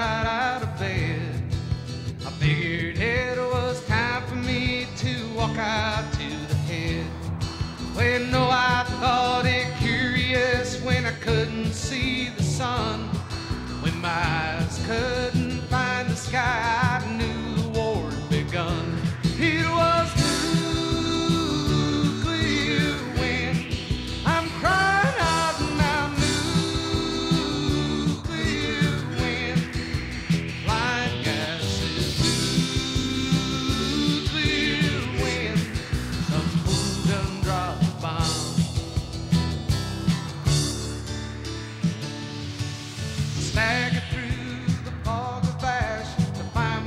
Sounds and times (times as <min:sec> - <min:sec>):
Music: 0:00.0 - 0:46.8.